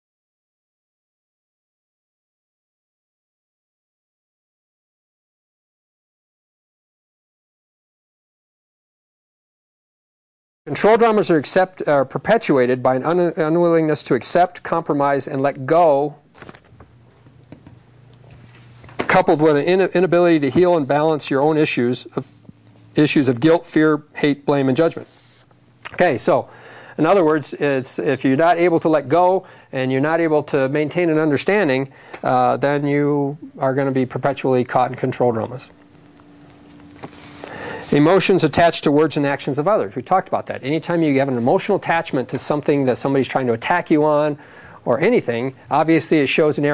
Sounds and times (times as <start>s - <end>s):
Speech: 10.7s - 16.2s, 19.0s - 22.3s, 23.0s - 25.1s, 25.9s - 35.8s, 37.9s - 46.7s.